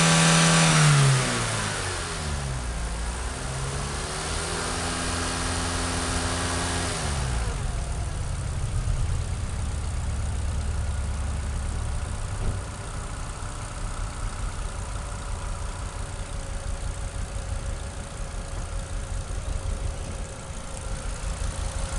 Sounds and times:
Accelerating, revving, vroom: 0.0 - 7.6
Car: 0.0 - 21.9.

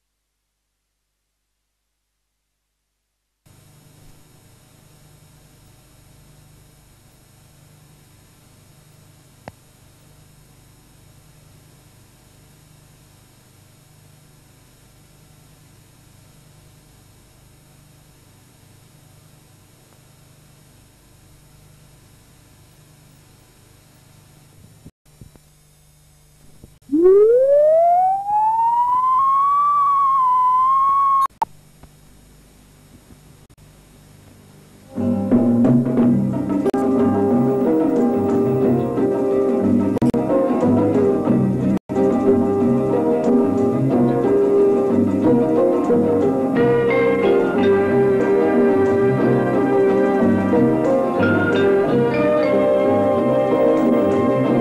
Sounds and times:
Siren: 26.8 - 31.4.

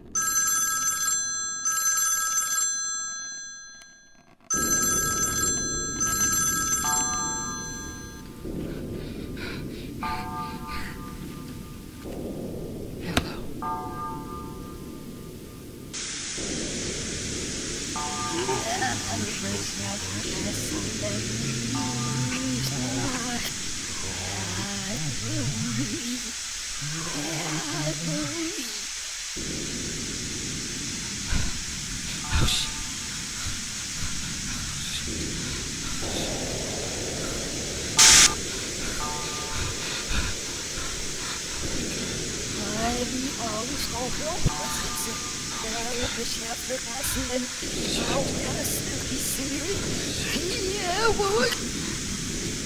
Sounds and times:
Speech: 18.3 - 28.8, 42.6 - 51.7.

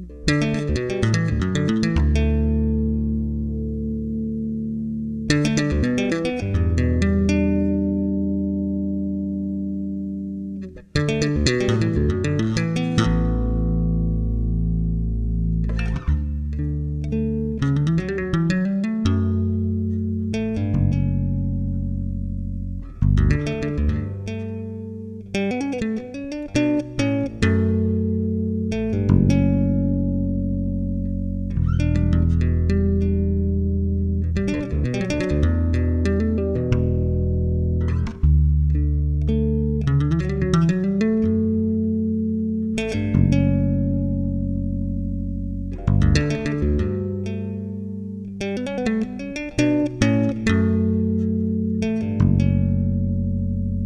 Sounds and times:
Bass guitar: 0.0 - 53.8.

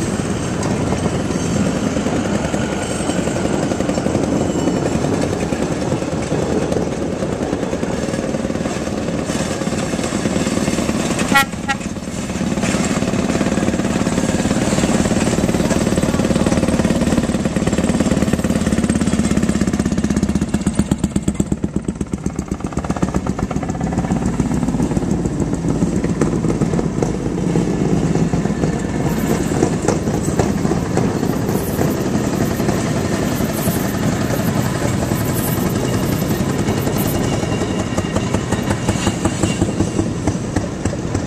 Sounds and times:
Outside, urban or manmade: 0.0 - 41.2
Railroad car, train wagon: 0.0 - 41.2.

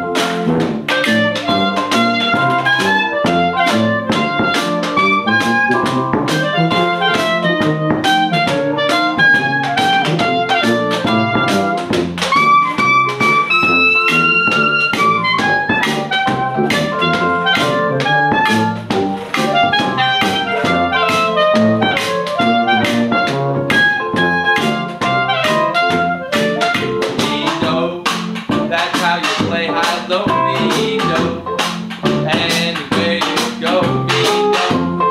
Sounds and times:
Music: 0.0 - 35.1.

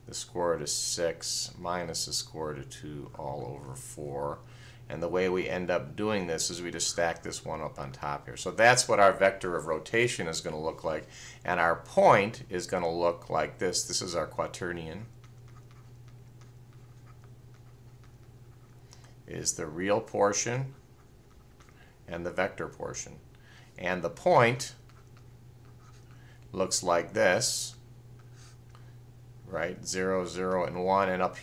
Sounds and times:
Inside, small room: 0.0 - 31.4
Speech: 0.1 - 15.1, 19.3 - 20.8, 22.1 - 23.2, 23.8 - 24.8, 26.5 - 27.8, 29.5 - 31.4.

